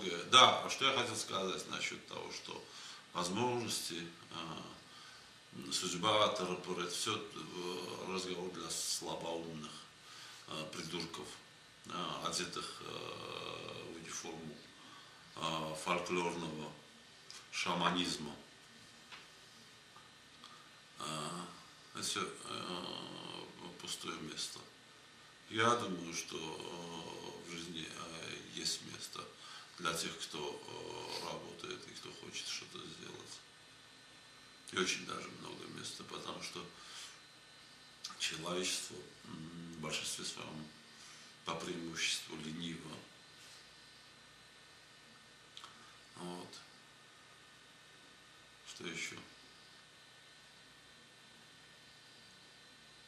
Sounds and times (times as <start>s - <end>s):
Speech: 0.0s - 4.8s, 5.6s - 9.9s, 10.5s - 14.7s, 15.4s - 18.5s, 21.0s - 24.8s, 25.5s - 33.5s, 34.7s - 36.8s, 38.1s - 40.8s, 41.5s - 43.1s, 46.2s - 46.7s, 48.7s - 49.4s
Inside, small room: 0.0s - 53.0s.